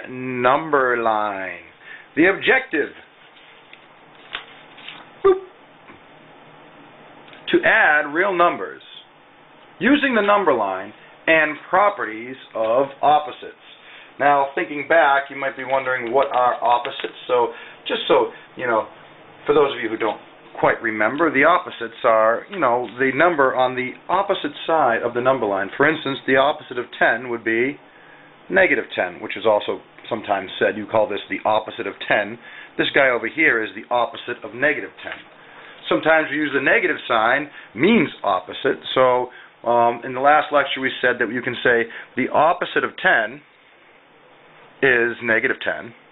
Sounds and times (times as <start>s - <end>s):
Speech: 0.0s - 3.1s, 7.4s - 9.1s, 9.8s - 27.8s, 28.5s - 43.5s, 44.8s - 46.0s
Inside, small room: 0.0s - 46.1s.